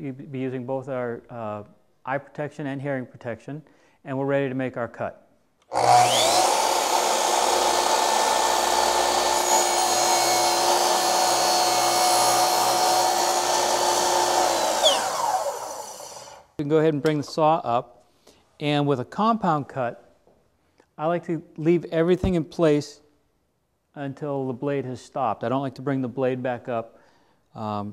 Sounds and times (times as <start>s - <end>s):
Speech: 0.0s - 5.2s, 16.6s - 17.9s, 18.6s - 20.0s, 21.0s - 23.0s, 23.9s - 26.9s, 27.6s - 27.9s.